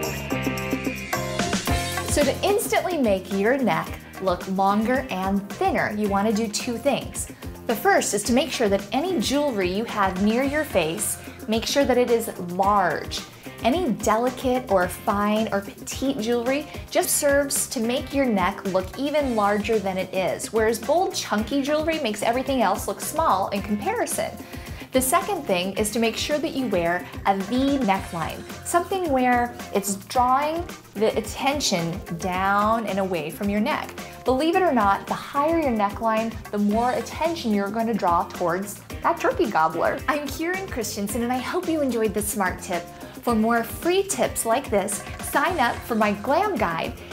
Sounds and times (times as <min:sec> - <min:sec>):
Music: 0:00.0 - 0:47.1
Speech: 0:02.1 - 0:47.0.